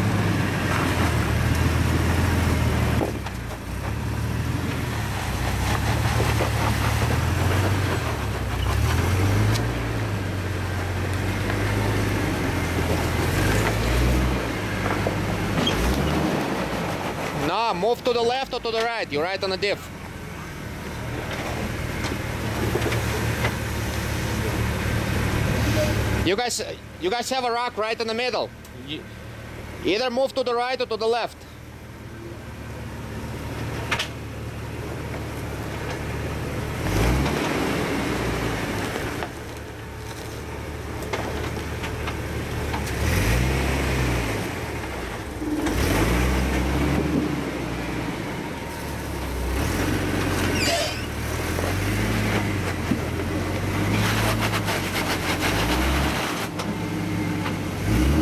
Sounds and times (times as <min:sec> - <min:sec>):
Speech: 0:17.4 - 0:19.9, 0:25.7 - 0:29.1, 0:29.8 - 0:31.4.